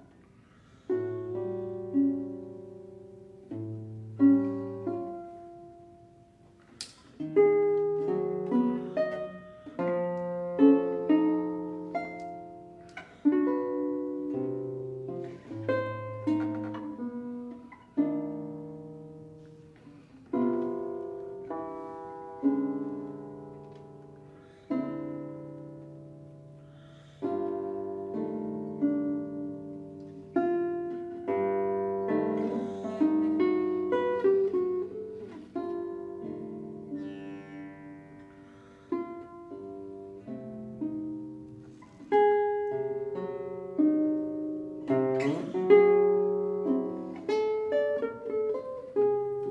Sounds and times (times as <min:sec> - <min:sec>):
Classical music: 0:00.0 - 0:49.5.